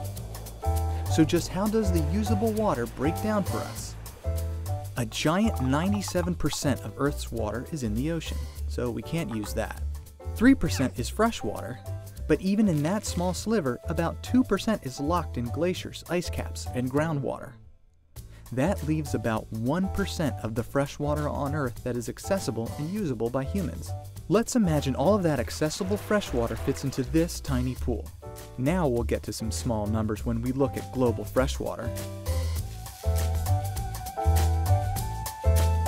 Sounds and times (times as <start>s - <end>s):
Music: 0.0s - 35.8s
Speech: 1.1s - 4.0s, 5.0s - 9.8s, 10.4s - 17.6s, 18.5s - 31.9s.